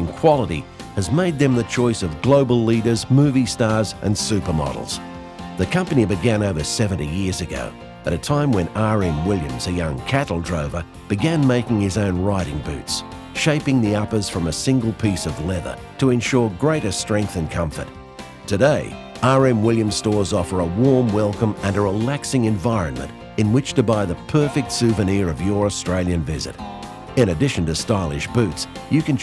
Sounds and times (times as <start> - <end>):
Speech: 0.0 - 5.0, 5.6 - 17.9, 18.5 - 26.6, 27.2 - 29.2
Music: 0.0 - 29.2.